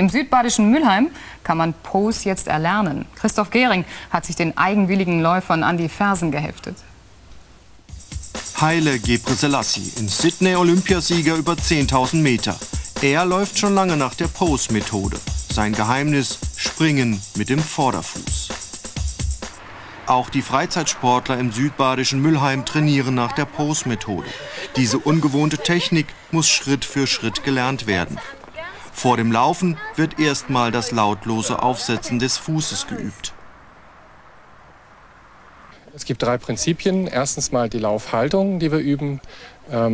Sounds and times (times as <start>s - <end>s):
Speech: 0.0s - 6.9s, 8.6s - 18.5s, 20.1s - 33.4s, 35.9s - 39.9s
Music: 7.9s - 19.6s, 24.7s - 26.0s.